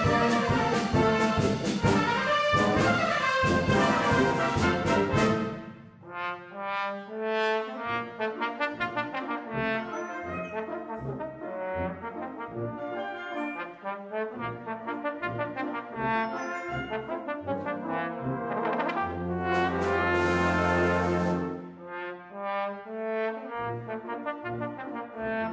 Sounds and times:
Trombone: 0.0 - 25.5
Trumpet: 0.0 - 25.5.

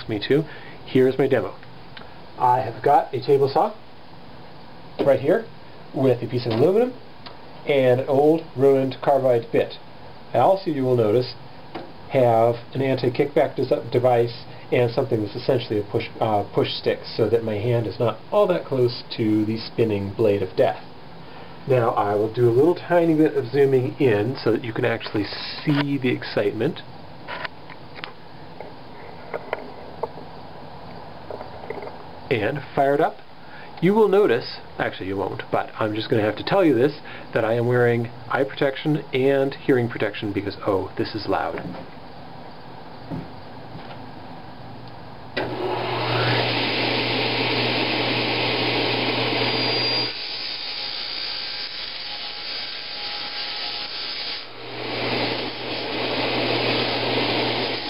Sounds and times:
Speech: 0.0 - 1.6, 2.4 - 3.8, 5.0 - 7.0, 7.6 - 11.4, 12.1 - 20.9, 21.7 - 26.9, 32.3 - 33.2, 33.8 - 41.8.

